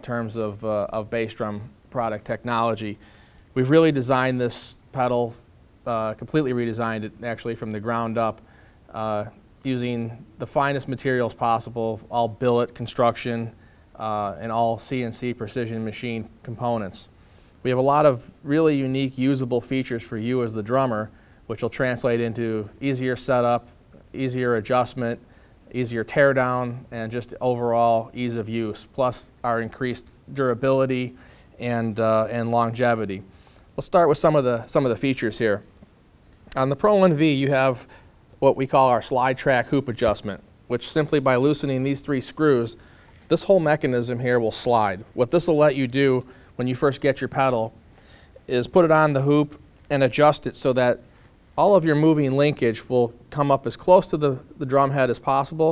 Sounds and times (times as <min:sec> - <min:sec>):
Speech: 0:00.0 - 0:03.0, 0:03.6 - 0:35.7, 0:36.5 - 0:47.8, 0:48.4 - 0:51.0, 0:51.6 - 0:55.7.